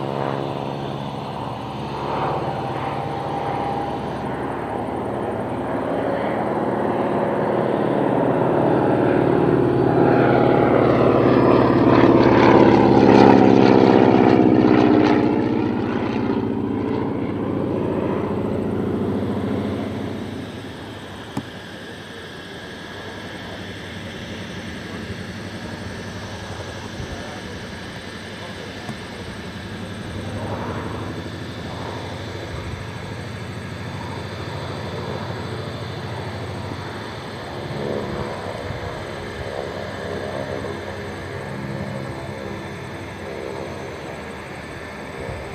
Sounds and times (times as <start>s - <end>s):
Vehicle: 0.0s - 45.5s
Speech: 21.6s - 30.8s.